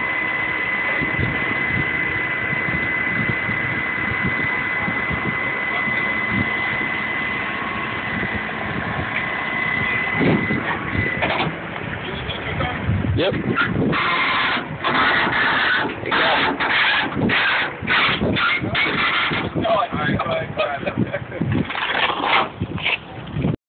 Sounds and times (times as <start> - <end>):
Speech: 12.0 - 13.5, 19.5 - 21.0.